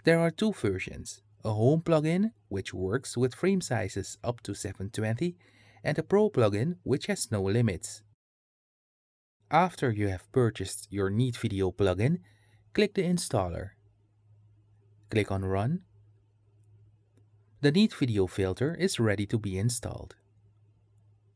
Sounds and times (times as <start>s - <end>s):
Speech: 0.0s - 8.2s, 9.5s - 12.2s, 12.8s - 13.8s, 15.1s - 15.9s, 17.6s - 20.2s.